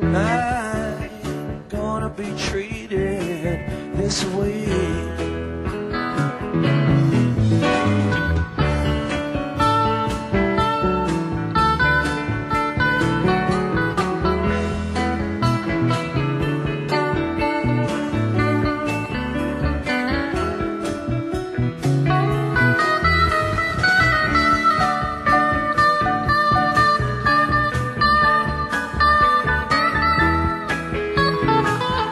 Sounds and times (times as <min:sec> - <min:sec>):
Steel guitar, slide guitar: 0:03.5 - 0:32.1.